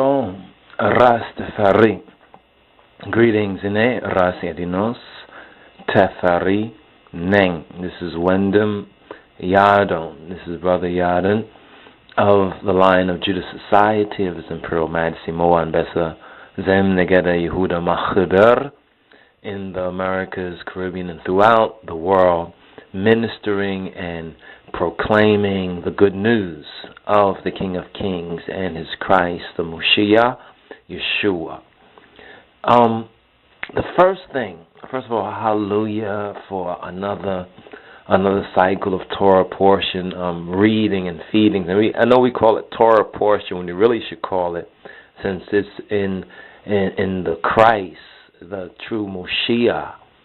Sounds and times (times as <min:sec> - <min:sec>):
Speech: 0:00.0 - 0:02.2, 0:03.0 - 0:18.8, 0:19.4 - 0:31.7, 0:32.6 - 0:50.1.